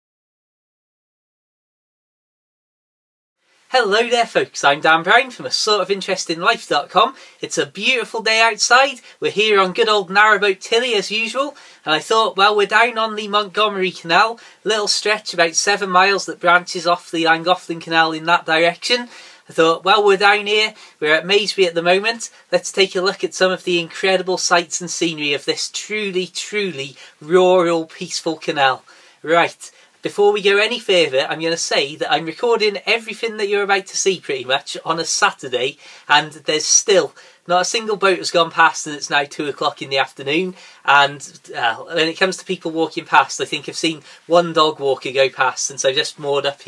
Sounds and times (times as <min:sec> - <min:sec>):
Speech: 0:03.7 - 0:46.6.